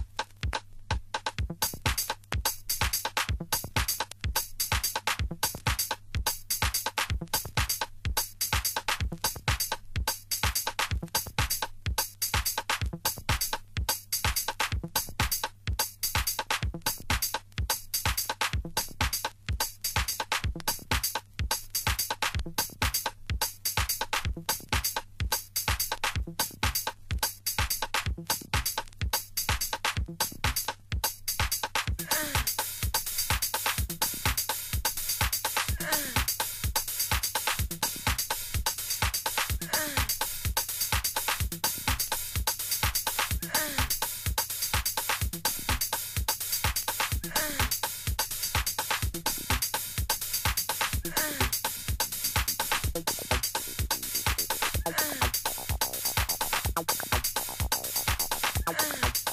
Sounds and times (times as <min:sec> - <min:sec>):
Music: 0:00.0 - 0:59.3.